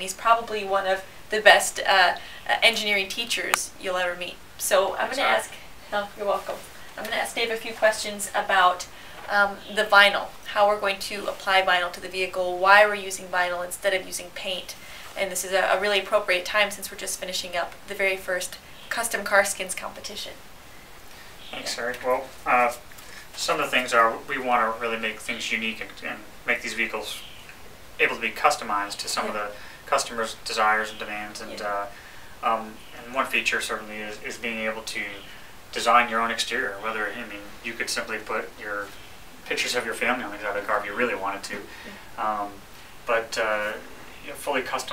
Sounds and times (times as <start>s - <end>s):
Speech: 0.0s - 20.4s, 21.5s - 22.8s, 23.4s - 27.2s, 28.0s - 38.9s, 39.5s - 44.9s.